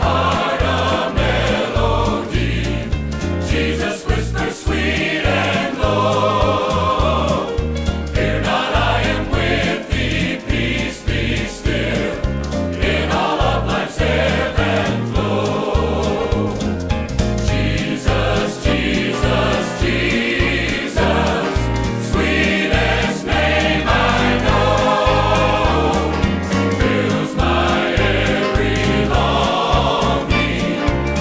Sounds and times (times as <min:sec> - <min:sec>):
Choir: 0:00.0 - 0:31.2.